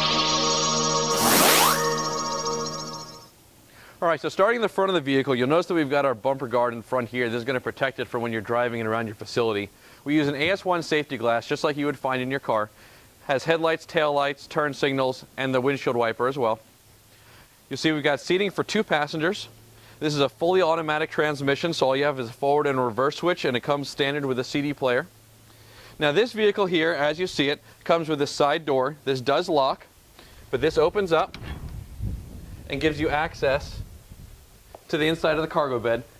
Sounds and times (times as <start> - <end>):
Speech: 4.0 - 16.6, 17.7 - 25.1, 26.0 - 29.9, 30.5 - 31.4, 32.7 - 33.8, 34.9 - 36.1.